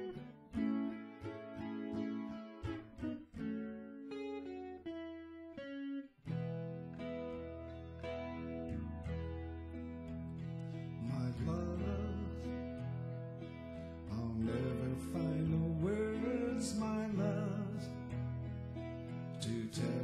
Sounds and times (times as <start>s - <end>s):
Guitar: 0.0s - 20.0s.